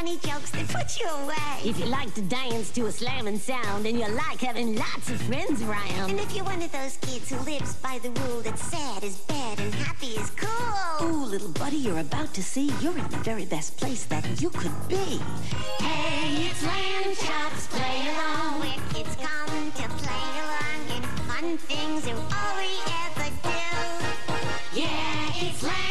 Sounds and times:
Music: 0.0s - 25.9s.

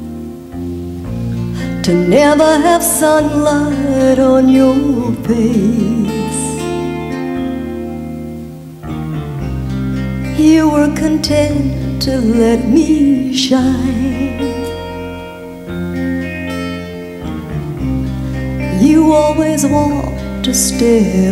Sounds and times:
Music: 0.0s - 21.3s.

